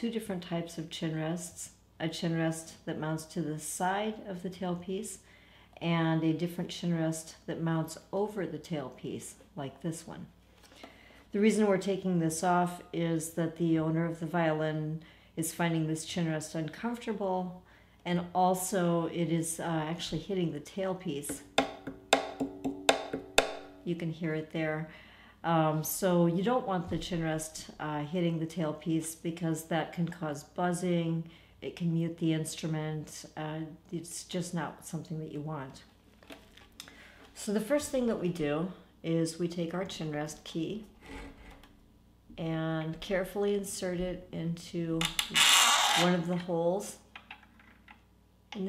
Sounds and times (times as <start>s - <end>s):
Speech: 0.0s - 10.4s, 11.3s - 21.4s, 23.8s - 35.9s, 37.4s - 40.9s, 42.4s - 45.2s, 46.0s - 47.1s.